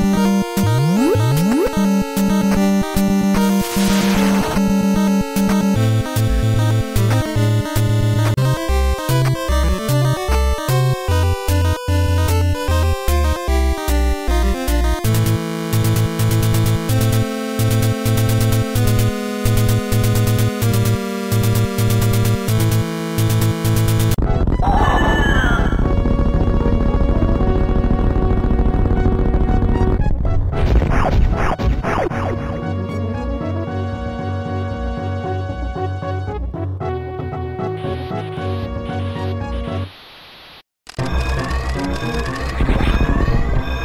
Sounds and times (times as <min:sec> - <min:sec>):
Music: 0:00.0 - 0:40.0, 0:41.0 - 0:43.8.